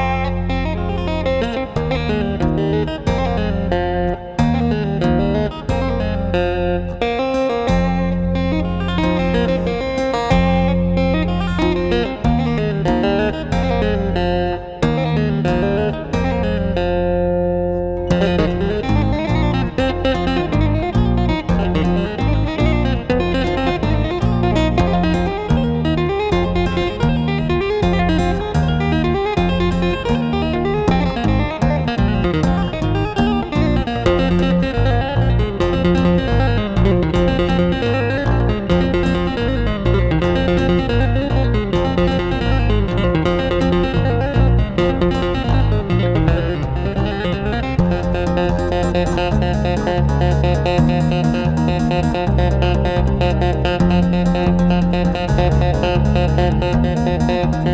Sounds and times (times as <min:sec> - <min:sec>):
Music: 0:00.0 - 0:57.7.